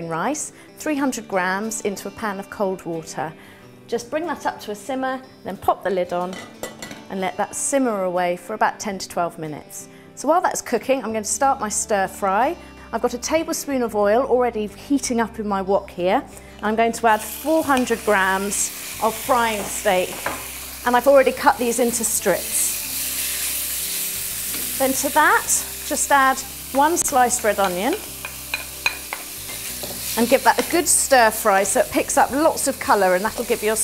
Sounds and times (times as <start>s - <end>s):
Music: 0.0s - 33.8s
Speech: 3.9s - 6.4s, 7.1s - 20.1s, 24.8s - 28.0s, 30.2s - 33.8s.